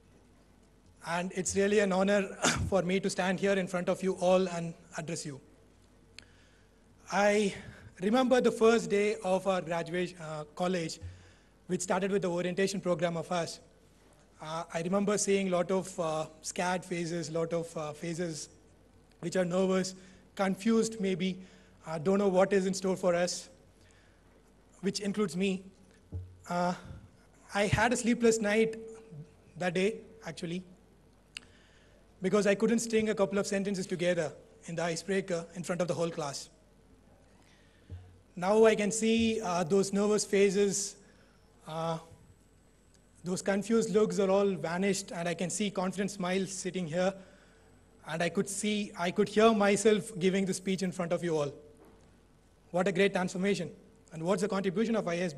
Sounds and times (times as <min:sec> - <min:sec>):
Male speech, man speaking: 0:01.0 - 0:05.5, 0:07.1 - 0:11.0, 0:11.7 - 0:13.7, 0:14.4 - 0:18.6, 0:19.2 - 0:23.6, 0:24.8 - 0:25.7, 0:26.5 - 0:30.7, 0:32.2 - 0:36.6, 0:38.4 - 0:41.0, 0:41.7 - 0:42.2, 0:43.2 - 0:47.2, 0:48.0 - 0:51.6, 0:52.7 - 0:55.3.